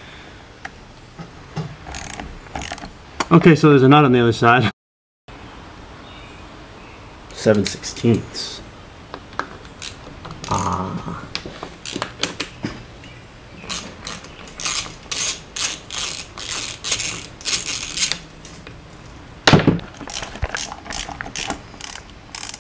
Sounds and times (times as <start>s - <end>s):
Speech: 3.3s - 4.7s, 7.4s - 8.6s.